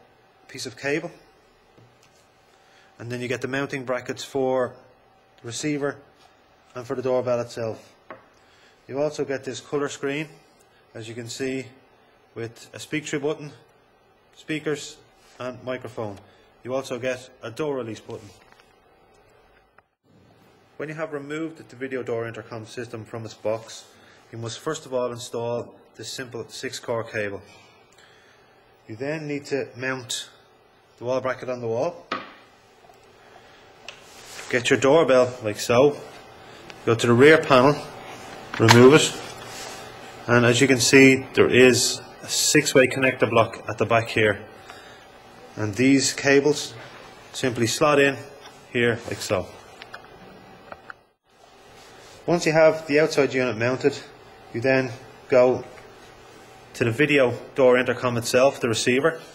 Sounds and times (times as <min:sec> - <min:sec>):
Speech: 0:00.5 - 0:01.2, 0:03.0 - 0:06.1, 0:06.7 - 0:08.0, 0:08.9 - 0:11.8, 0:12.4 - 0:13.7, 0:14.4 - 0:18.4, 0:20.8 - 0:27.6, 0:28.9 - 0:30.4, 0:31.0 - 0:32.1, 0:34.4 - 0:36.1, 0:36.8 - 0:38.0, 0:38.6 - 0:39.3, 0:40.3 - 0:44.5, 0:45.5 - 0:49.6, 0:52.2 - 0:55.8, 0:56.7 - 0:59.3.